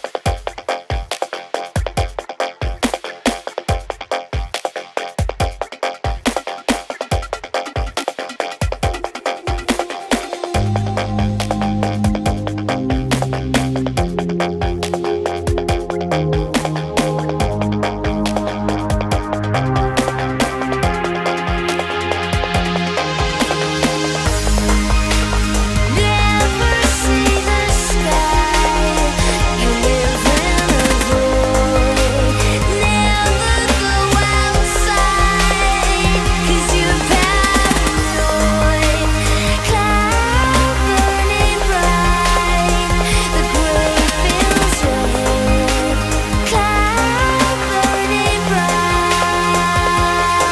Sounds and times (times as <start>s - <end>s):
Music: 0.0s - 50.5s.